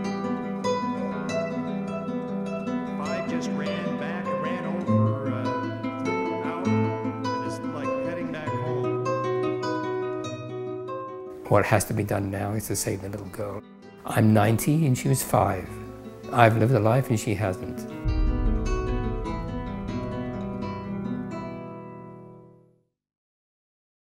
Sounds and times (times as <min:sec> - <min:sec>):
Music: 0:00.0 - 0:23.0
Speech: 0:03.0 - 0:05.6, 0:06.4 - 0:08.8, 0:11.4 - 0:18.0.